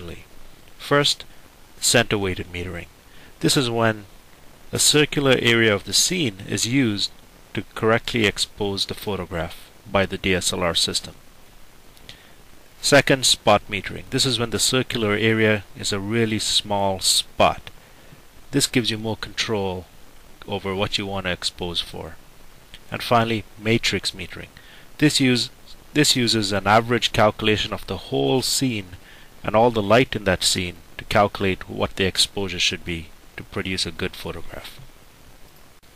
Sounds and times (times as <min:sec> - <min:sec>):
Speech: 0:00.0 - 0:04.1, 0:04.7 - 0:11.2, 0:12.8 - 0:17.7, 0:18.5 - 0:22.2, 0:22.8 - 0:34.9.